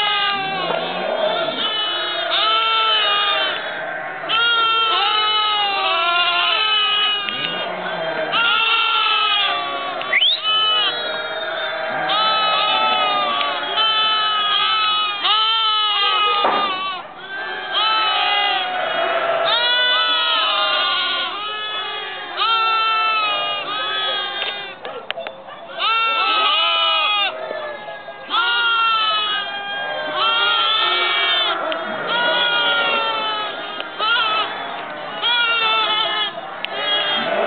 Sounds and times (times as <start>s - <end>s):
Goat: 0.0s - 37.4s
Sheep: 0.0s - 37.4s.